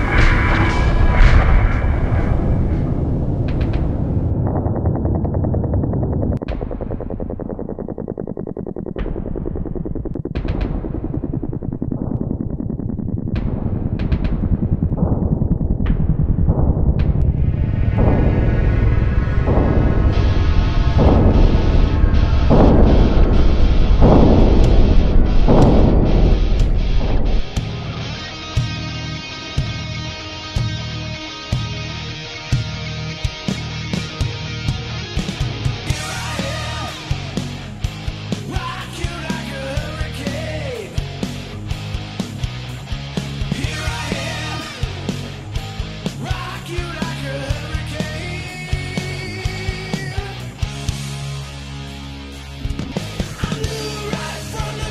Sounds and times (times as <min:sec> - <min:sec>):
Music: 0:00.0 - 0:04.3, 0:13.4 - 0:54.9.